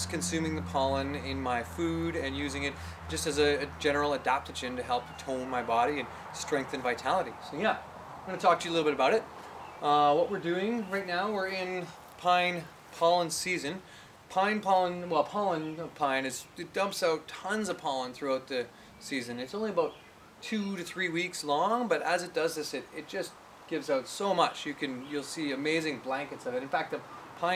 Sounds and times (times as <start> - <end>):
Speech: 0.0 - 27.5.